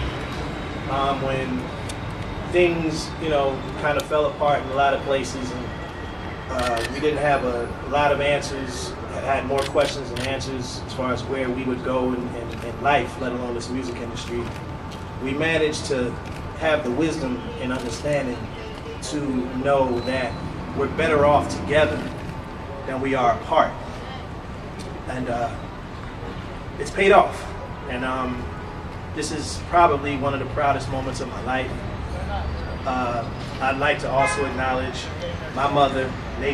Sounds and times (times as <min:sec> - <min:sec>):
Speech: 0:00.9 - 0:01.7, 0:02.6 - 0:05.7, 0:06.5 - 0:14.5, 0:15.2 - 0:22.1, 0:25.1 - 0:25.6, 0:26.8 - 0:28.5, 0:29.2 - 0:36.5.